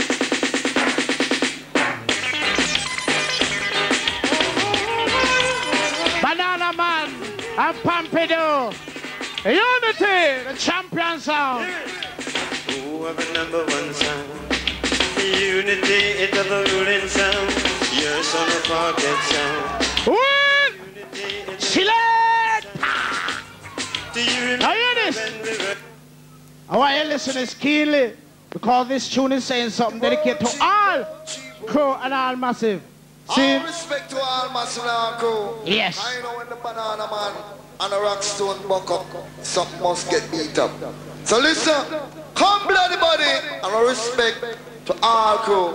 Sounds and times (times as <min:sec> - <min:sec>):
Speech: 0:06.2 - 0:08.8, 0:09.4 - 0:11.9, 0:26.7 - 0:45.7.